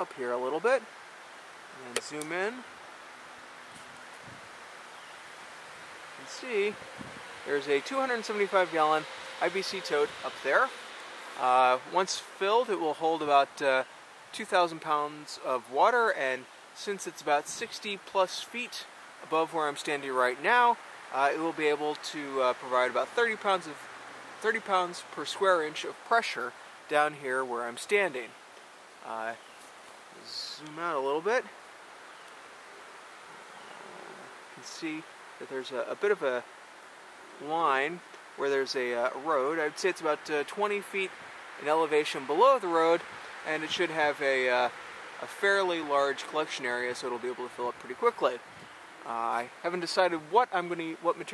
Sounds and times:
Speech: 0.0s - 0.9s, 1.8s - 2.7s, 6.2s - 6.8s, 7.5s - 10.8s, 11.4s - 23.8s, 24.4s - 28.3s, 29.0s - 29.4s, 30.2s - 31.5s, 34.6s - 36.4s, 37.4s - 48.4s, 49.0s - 51.3s.

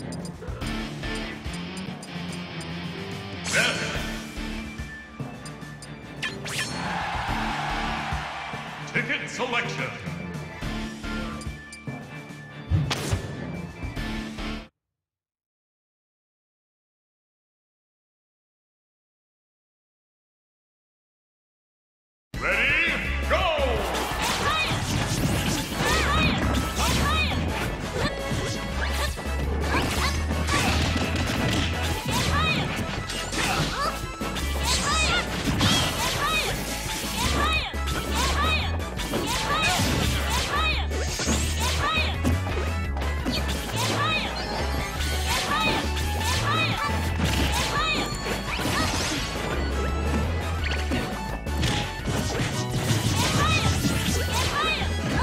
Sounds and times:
Music: 0.0s - 14.8s, 22.4s - 55.2s.

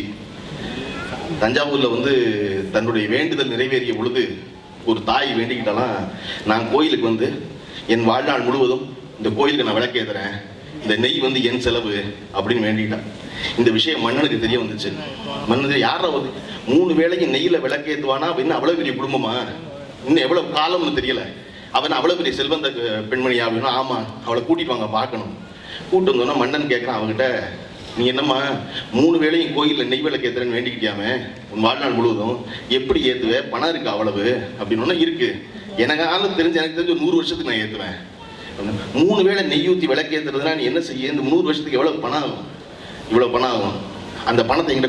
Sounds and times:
Male speech, man speaking: 1.4s - 42.5s, 43.1s - 44.8s.

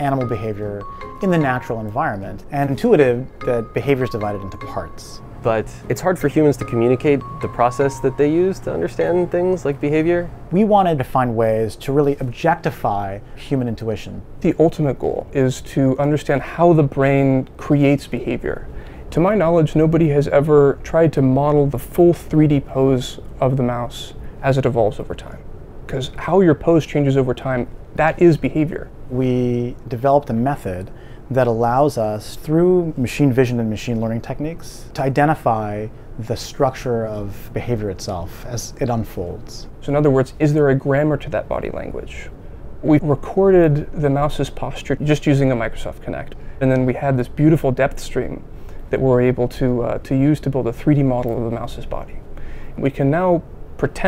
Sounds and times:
Speech: 0.0s - 54.0s.

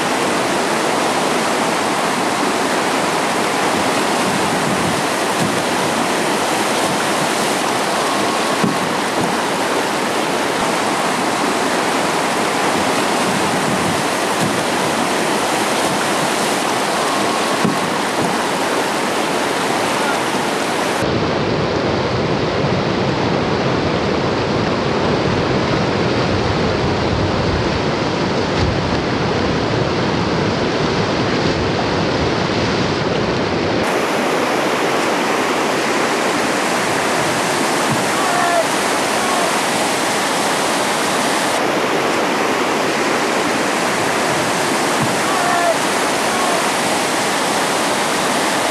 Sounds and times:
Boat, Water vehicle: 0.0s - 48.7s.

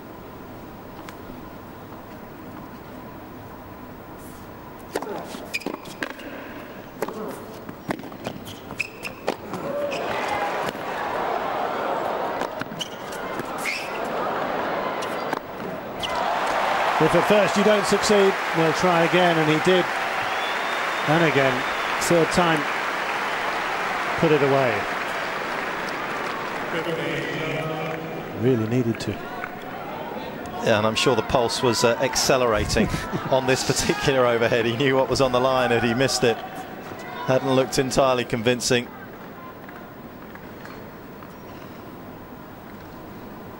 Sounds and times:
Speech: 17.0s - 19.9s, 21.1s - 22.7s, 26.7s - 29.4s, 30.5s - 39.6s.

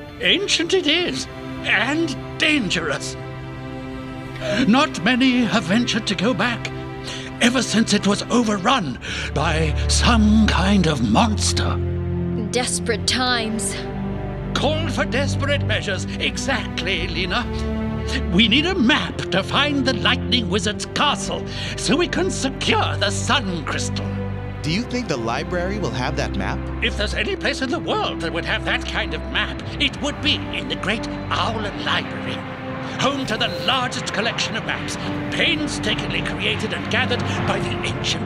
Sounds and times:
Music: 0.0s - 38.2s
Speech: 0.2s - 3.2s, 7.4s - 11.8s, 12.4s - 13.9s, 14.6s - 24.0s, 24.6s - 32.4s, 33.0s - 38.2s.

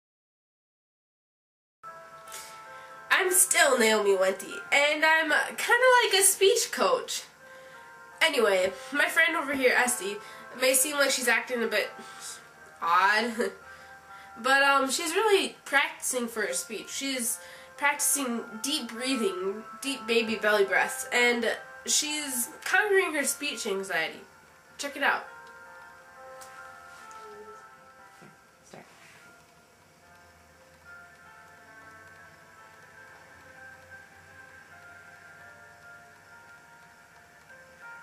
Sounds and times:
Music: 1.8s - 38.0s
Speech: 3.1s - 7.3s, 12.8s - 13.6s, 14.4s - 24.2s, 24.8s - 25.3s.

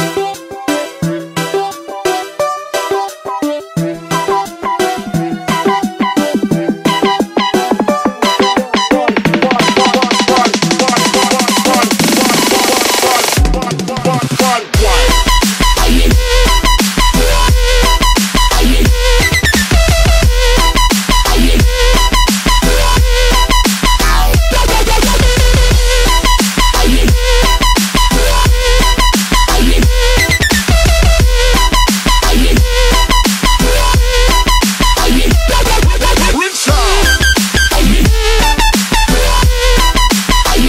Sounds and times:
Dubstep: 0.0s - 40.6s.

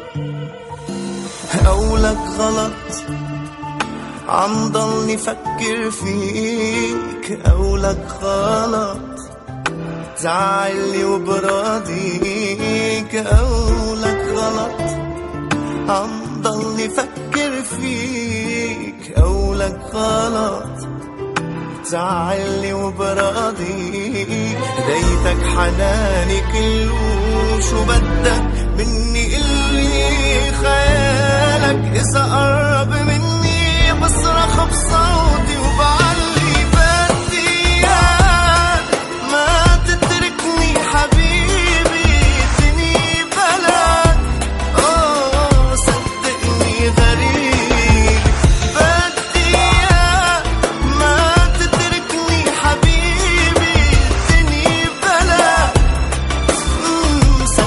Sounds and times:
Music: 0.0s - 57.6s.

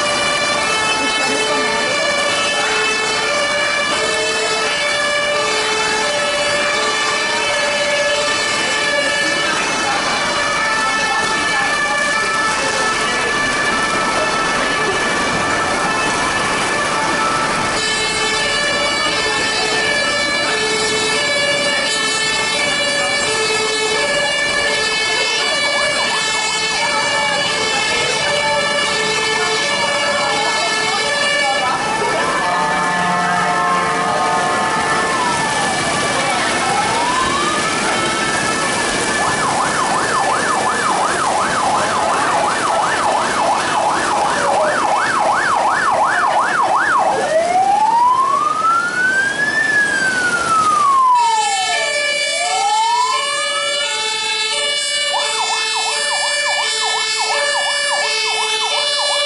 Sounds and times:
Ambulance (siren): 0.0s - 59.2s
Police car (siren): 0.0s - 59.2s.

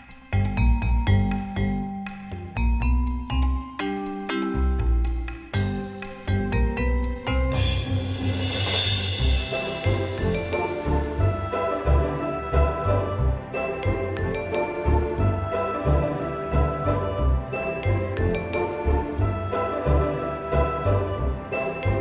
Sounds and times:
Music: 0.0s - 22.0s.

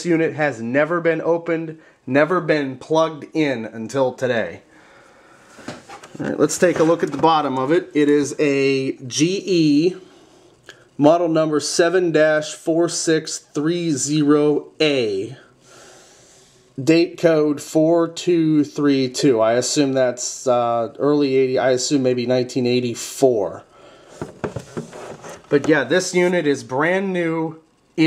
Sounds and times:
Speech: 0.0s - 4.7s, 6.2s - 10.0s, 11.0s - 15.5s, 16.8s - 23.7s, 25.5s - 28.0s.

